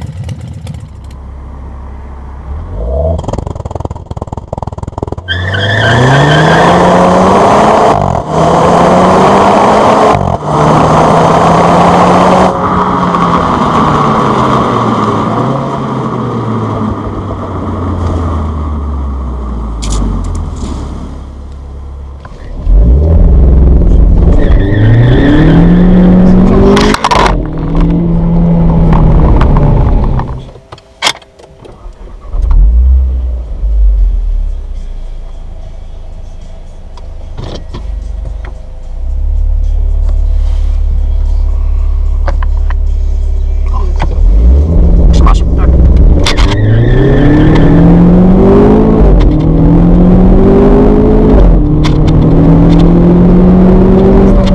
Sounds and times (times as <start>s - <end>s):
Car: 0.0s - 54.5s
Outside, urban or manmade: 0.0s - 54.5s.